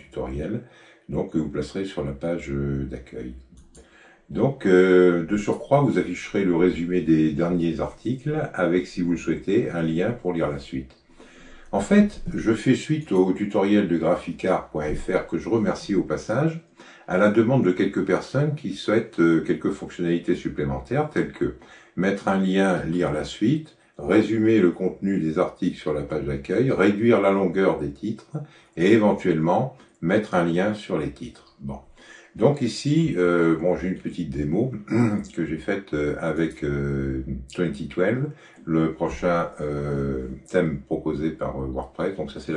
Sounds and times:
Speech: 0.0s - 42.5s.

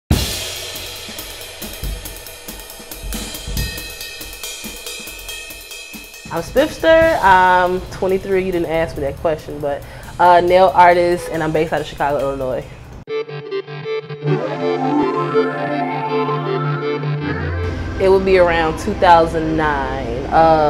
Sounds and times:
Hi-hat: 0.2s - 12.6s
Speech: 6.3s - 12.7s, 18.0s - 20.6s.

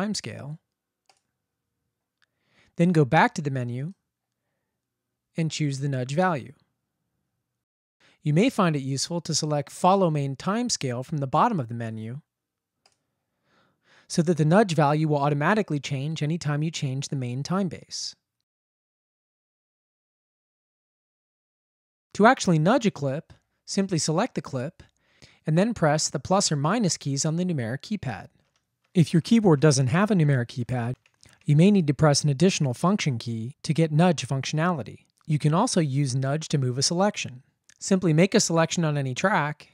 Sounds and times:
Speech: 0.0s - 0.6s, 2.8s - 4.0s, 5.4s - 6.6s, 8.2s - 12.3s, 14.1s - 18.2s, 22.2s - 28.3s, 29.0s - 39.7s.

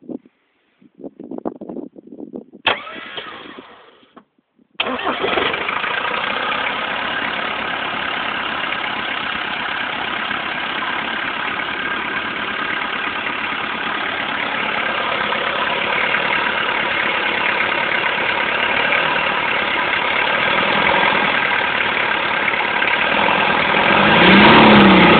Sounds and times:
Idling: 4.8s - 25.1s.

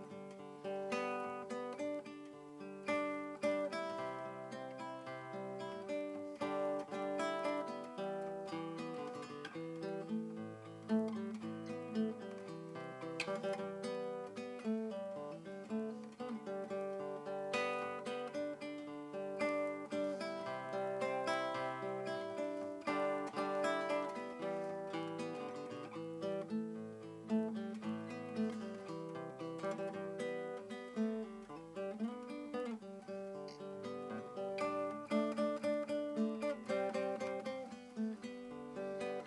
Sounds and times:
Acoustic guitar: 0.0s - 39.2s.

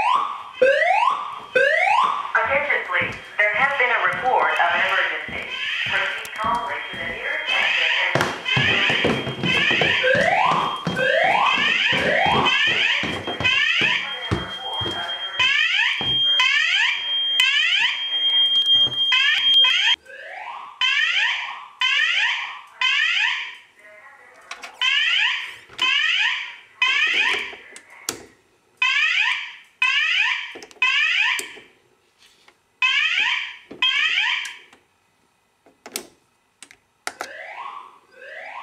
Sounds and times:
Fire alarm: 0.0s - 23.6s, 24.8s - 27.6s, 28.8s - 31.6s, 32.8s - 34.6s, 37.2s - 38.6s.

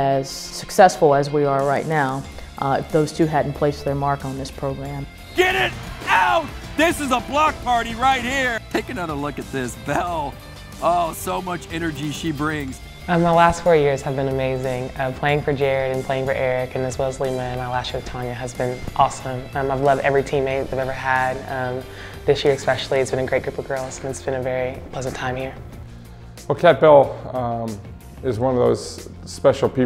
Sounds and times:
Music: 0.0s - 29.8s
Speech: 5.4s - 12.8s.

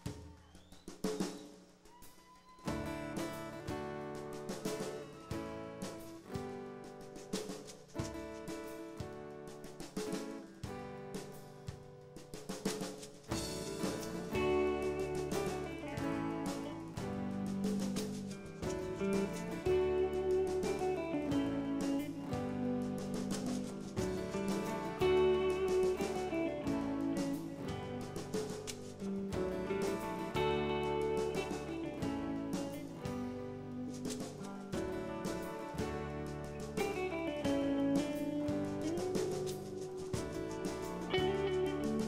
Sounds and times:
Drum roll: 0.0s - 42.0s.

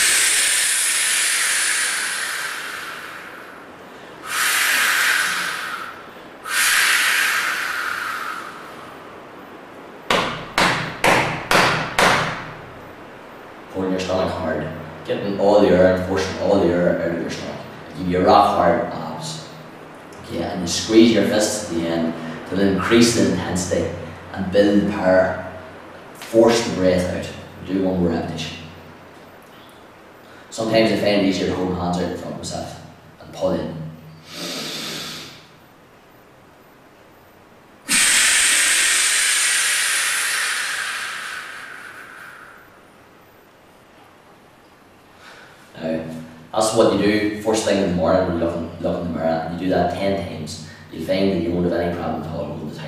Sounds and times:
Breathing: 0.3s - 9.0s, 30.2s - 30.5s, 34.2s - 35.5s, 37.9s - 42.8s, 45.2s - 45.7s, 50.6s - 51.0s.

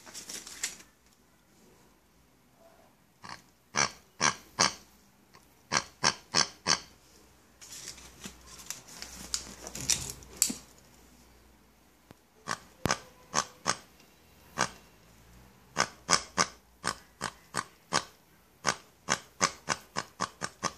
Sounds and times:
Inside, small room: 0.0s - 20.7s.

